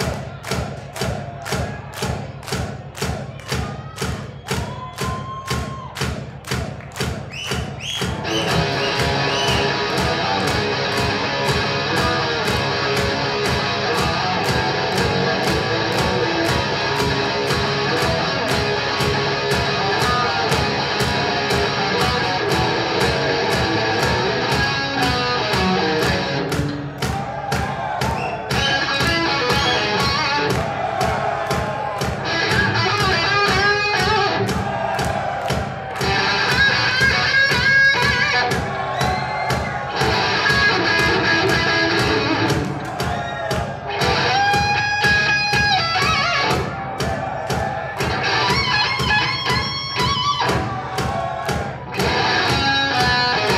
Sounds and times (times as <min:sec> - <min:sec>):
Exciting music: 0:08.1 - 0:27.2.